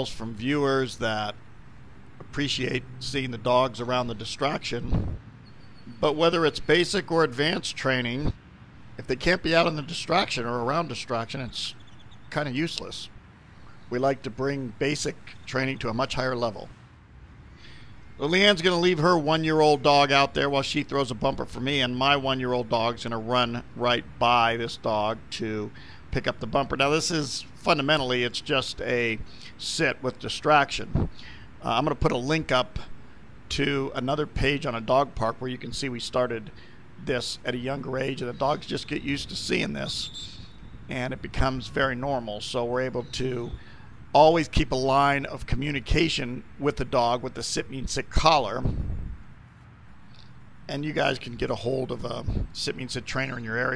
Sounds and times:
Speech: 0.0 - 1.4, 2.3 - 5.0, 5.9 - 8.4, 9.0 - 13.2, 13.9 - 16.7, 18.2 - 31.0, 31.6 - 32.9, 33.5 - 40.3, 40.9 - 43.6, 44.2 - 48.8, 50.7 - 53.7.

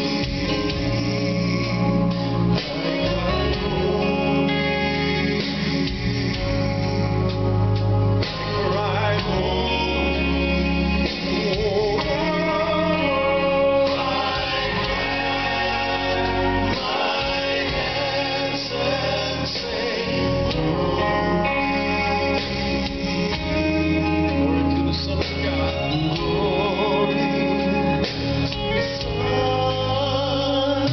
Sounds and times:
Male singing: 0.0 - 7.4, 8.3 - 30.9
Choir: 0.0 - 30.9.

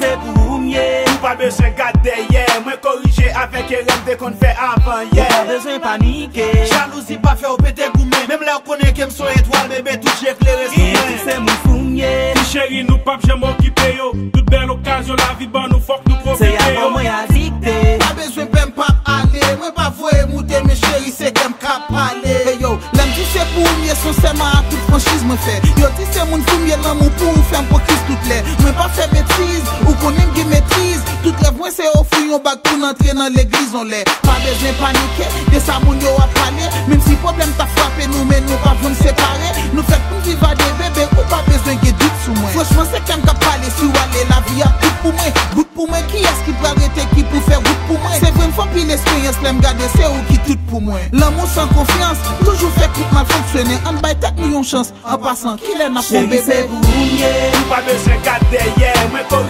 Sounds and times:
Exciting music: 0.0 - 8.1, 8.8 - 19.5, 22.8 - 31.6, 34.2 - 45.6, 46.2 - 50.6, 51.2 - 54.2, 56.0 - 59.4.

